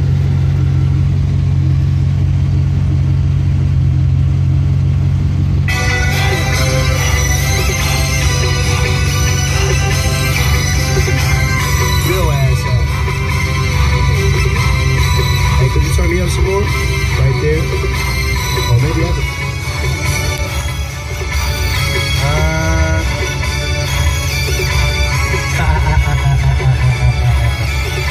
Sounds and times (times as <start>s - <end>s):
Music: 5.7s - 28.1s
Speech: 12.0s - 12.8s, 15.6s - 17.7s, 22.2s - 23.1s.